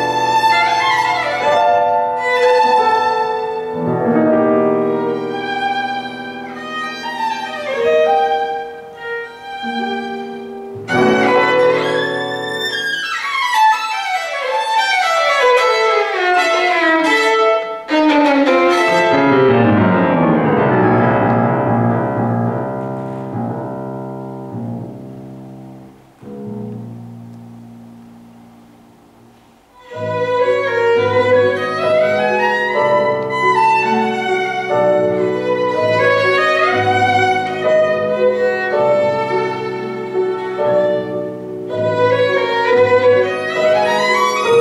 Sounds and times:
Violin, fiddle: 0:00.0 - 0:19.9, 0:29.8 - 0:44.6.

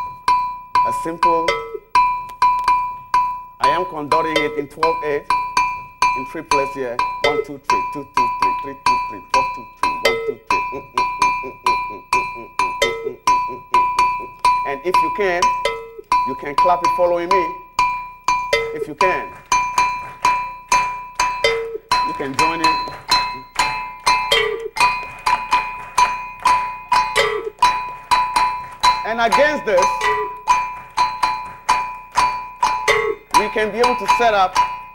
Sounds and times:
Percussion: 0:00.0 - 0:34.9
Speech: 0:00.8 - 0:01.6, 0:03.6 - 0:05.3, 0:06.2 - 0:09.6, 0:14.7 - 0:15.5, 0:16.3 - 0:17.6, 0:18.8 - 0:19.4, 0:22.1 - 0:22.8, 0:29.0 - 0:30.0, 0:33.3 - 0:34.6.

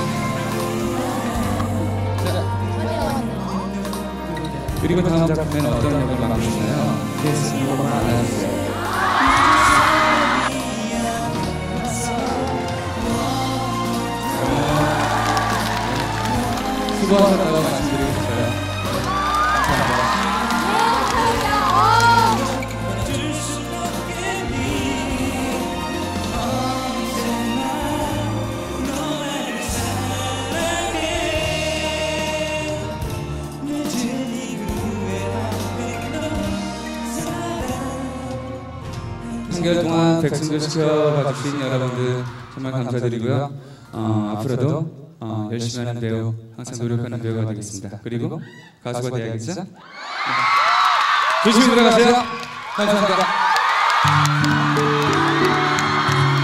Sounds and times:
Music of Asia: 0:00.0 - 0:42.8, 0:54.0 - 0:56.4
Singing: 0:00.0 - 0:42.8.

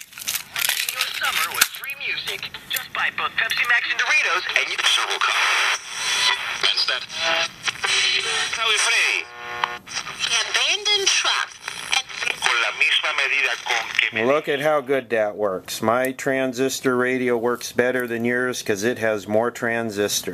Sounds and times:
Radio: 0:00.6 - 0:15.1
Speech: 0:00.8 - 0:05.5, 0:12.2 - 0:20.3.

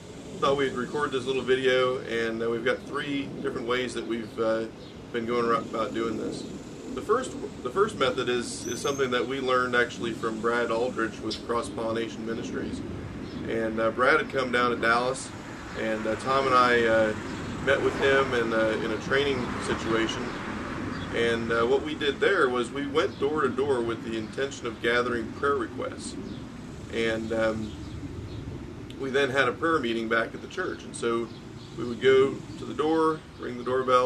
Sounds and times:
Speech: 0:00.4 - 0:12.8, 0:13.5 - 0:20.4, 0:21.2 - 0:26.2, 0:26.9 - 0:27.7, 0:28.9 - 0:34.0.

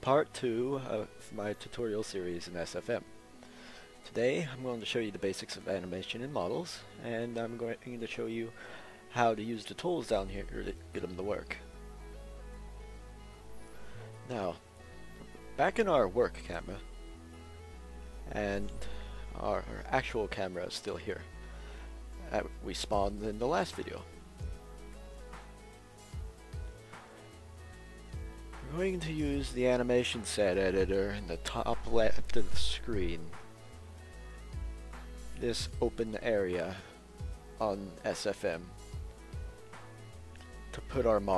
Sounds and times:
Speech: 0:00.0 - 0:03.0, 0:04.1 - 0:08.5, 0:09.1 - 0:11.6, 0:14.3 - 0:14.6, 0:15.6 - 0:16.8, 0:18.3 - 0:18.8, 0:19.4 - 0:21.2, 0:22.2 - 0:24.1, 0:28.6 - 0:33.3, 0:35.4 - 0:36.9, 0:37.6 - 0:38.7, 0:40.7 - 0:41.3
Music: 0:00.0 - 0:41.3.

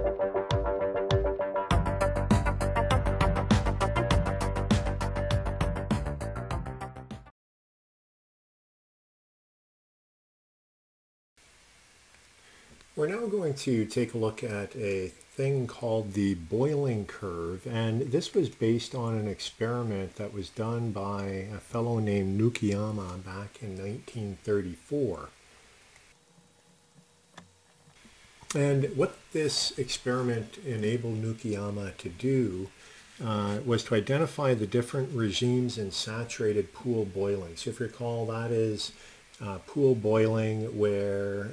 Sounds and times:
Speech: 0:13.0 - 0:25.4, 0:28.5 - 0:41.5.

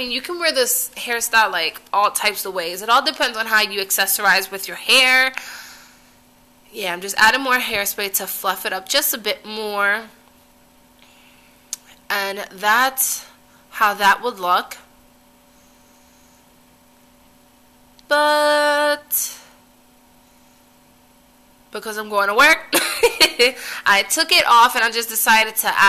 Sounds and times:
Speech: 0:00.0 - 0:05.4, 0:06.8 - 0:10.2, 0:12.1 - 0:14.8, 0:18.1 - 0:19.5, 0:21.8 - 0:22.7, 0:23.9 - 0:25.8
Inside, small room: 0:00.0 - 0:25.8.

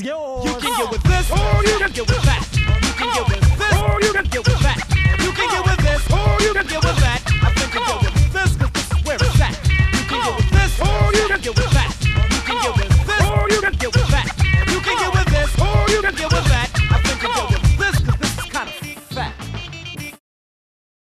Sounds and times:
Music: 0:00.4 - 0:20.2.

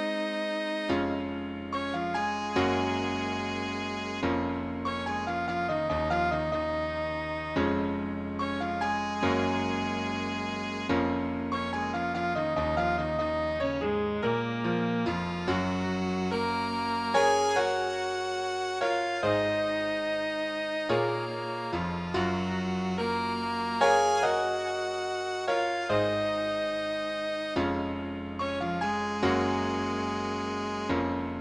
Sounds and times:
Musical instrument: 0:00.0 - 0:31.4.

